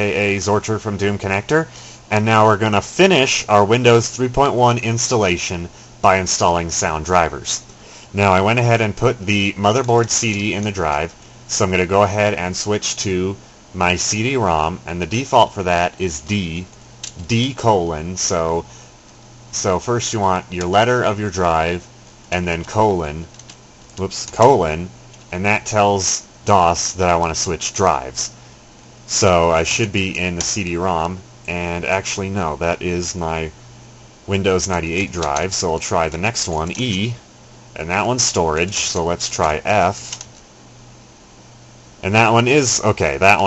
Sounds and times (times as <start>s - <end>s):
Speech: 0.0s - 18.7s, 19.5s - 23.4s, 24.0s - 28.4s, 29.1s - 33.6s, 34.3s - 37.2s, 37.8s - 40.2s, 42.0s - 43.4s.